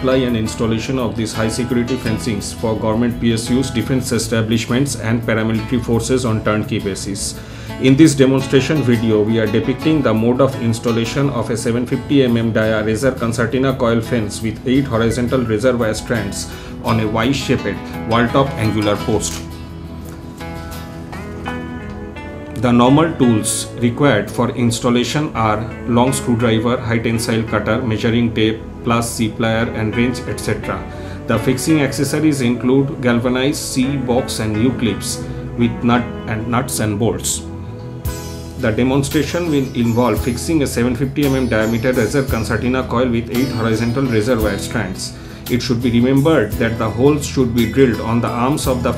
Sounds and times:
Speech: 0.0s - 19.5s, 22.6s - 37.5s, 38.6s - 48.9s
Music: 0.0s - 48.9s.

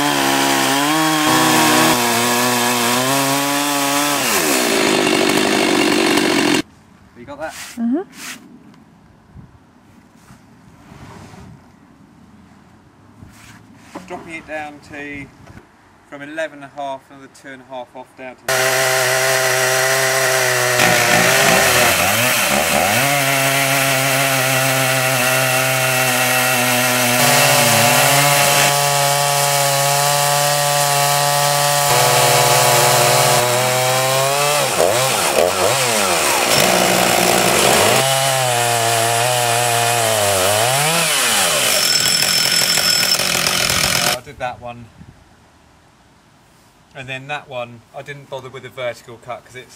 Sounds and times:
Chainsaw: 0.0s - 6.7s, 18.5s - 44.2s
Outside, rural or natural: 0.0s - 49.7s
Speech: 7.2s - 8.1s, 14.0s - 15.3s, 16.1s - 18.5s, 44.2s - 44.9s, 46.9s - 49.7s
Wood: 20.8s - 22.8s, 36.2s - 38.1s, 41.4s - 44.2s.

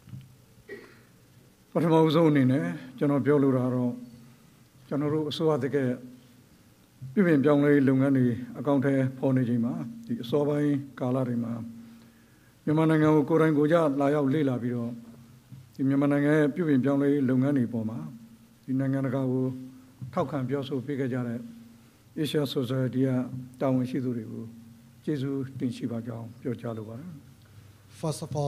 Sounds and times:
Narration, monologue: 0.0s - 28.4s
Male speech, man speaking: 1.8s - 4.1s, 4.9s - 6.1s, 7.2s - 11.8s, 12.7s - 15.0s, 15.8s - 21.5s, 22.2s - 27.2s, 27.9s - 28.4s.

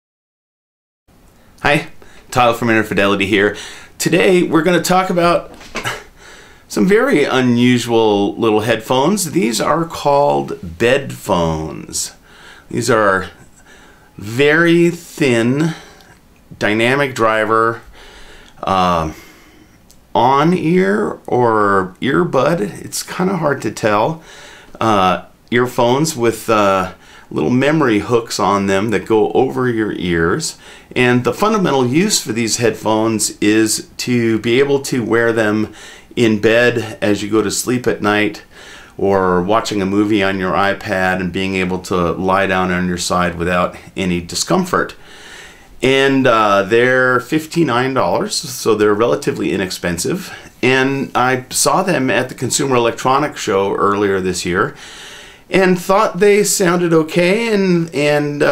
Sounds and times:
Speech: 1.6s - 6.0s, 6.7s - 13.4s, 14.2s - 16.0s, 16.6s - 17.9s, 18.6s - 19.2s, 20.1s - 24.2s, 24.8s - 45.0s, 45.8s - 54.8s, 55.5s - 58.5s.

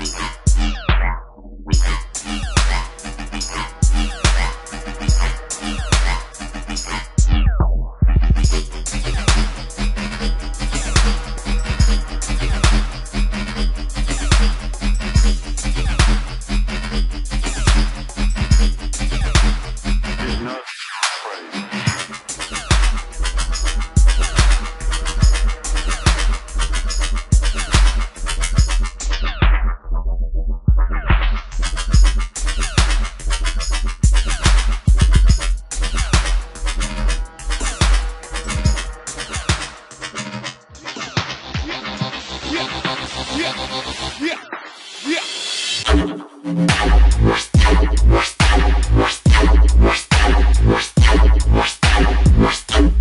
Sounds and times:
Dubstep: 0.0s - 29.9s, 30.7s - 53.0s.

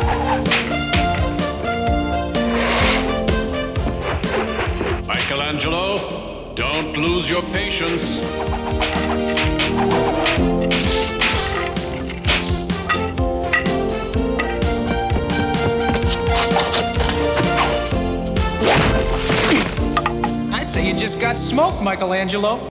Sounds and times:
Music: 0.0s - 22.7s
Speech: 5.1s - 8.2s, 20.5s - 22.7s.

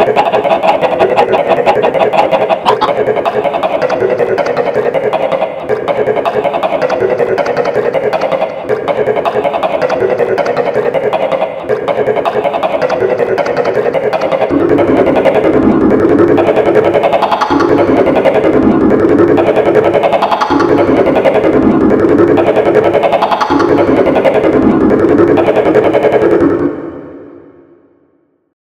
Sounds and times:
Music: 12.9s - 28.4s.

